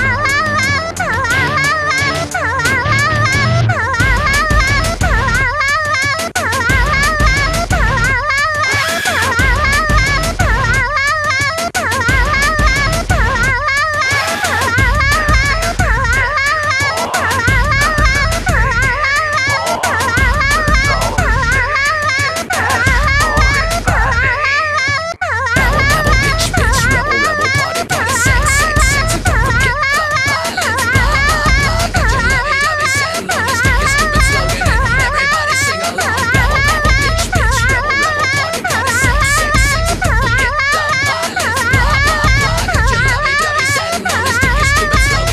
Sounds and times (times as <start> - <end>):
Music: 0.0 - 45.3.